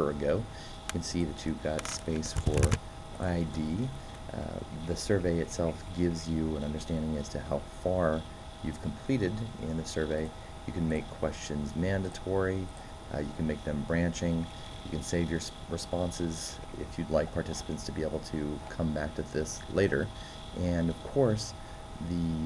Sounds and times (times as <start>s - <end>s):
Speech: 0.0s - 22.4s.